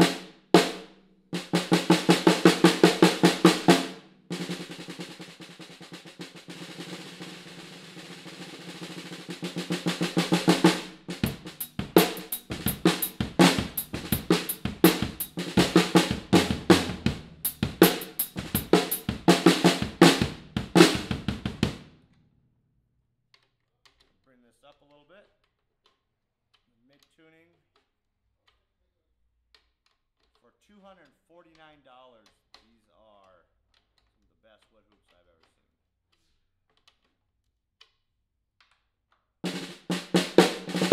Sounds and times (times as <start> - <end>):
Bass drum: 0.0 - 5.2, 8.8 - 21.8, 39.5 - 40.9.